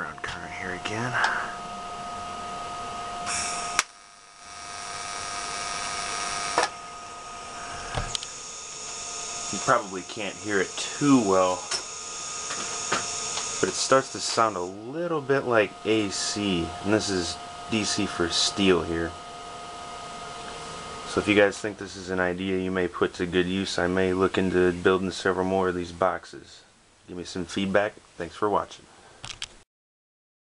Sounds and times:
Speech: 0.0s - 1.6s, 9.5s - 11.7s, 13.6s - 19.2s, 21.1s - 28.9s.

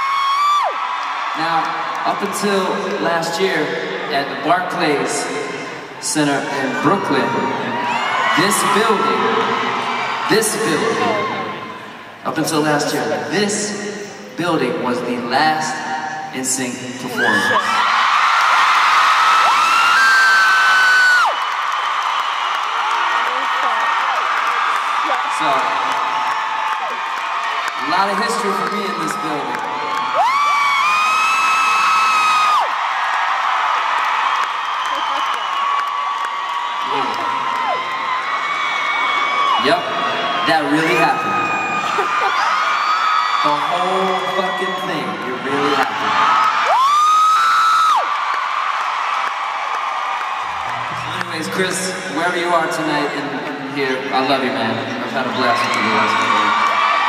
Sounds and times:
Male speech, man speaking: 1.4s - 5.4s, 6.0s - 7.6s, 8.4s - 9.5s, 10.3s - 11.3s, 12.3s - 13.8s, 14.4s - 17.7s, 25.4s - 25.8s, 27.8s - 29.7s, 36.9s - 37.2s, 39.6s - 39.9s, 40.5s - 41.5s, 43.4s - 46.0s, 51.0s - 56.6s
Narration, monologue: 12.1s - 17.6s.

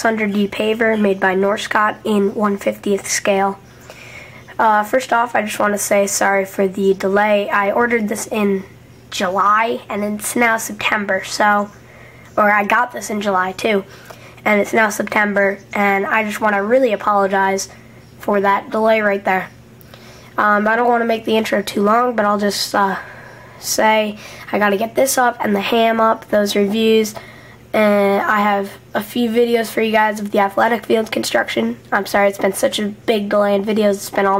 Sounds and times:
Speech: 0.0s - 3.7s, 4.5s - 11.8s, 12.4s - 19.6s, 20.4s - 34.3s.

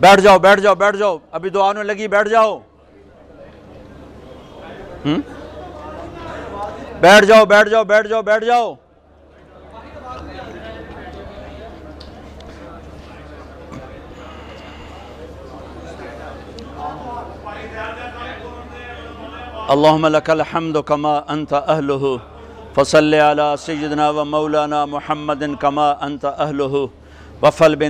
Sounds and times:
Speech: 0.0s - 3.8s, 4.5s - 8.8s, 9.4s - 14.3s, 15.0s - 27.8s.

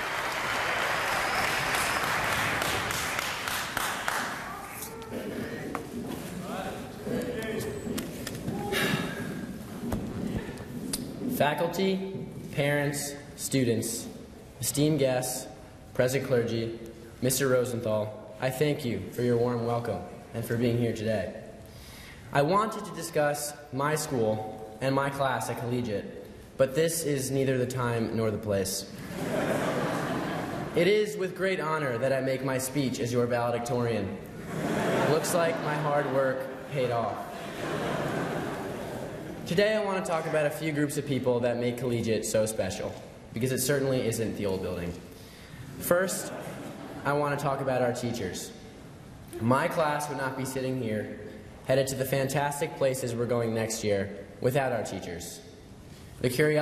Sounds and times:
Male speech, man speaking: 6.4s - 7.9s, 11.4s - 21.4s, 22.4s - 28.9s, 30.8s - 34.2s, 35.1s - 37.3s, 39.5s - 45.0s, 45.8s - 46.3s, 47.0s - 48.6s, 49.4s - 55.5s, 56.2s - 56.6s
Narration, monologue: 9.2s - 38.0s, 39.0s - 56.6s.

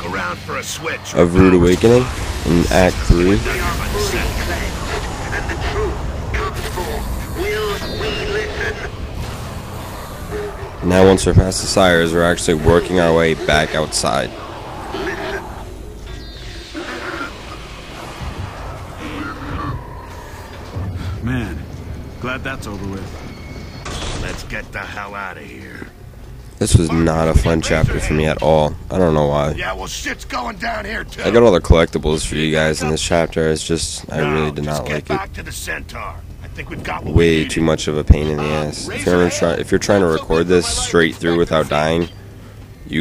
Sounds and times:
Speech: 0.0s - 8.9s, 10.8s - 14.3s, 24.2s - 25.9s, 26.6s - 42.2s.

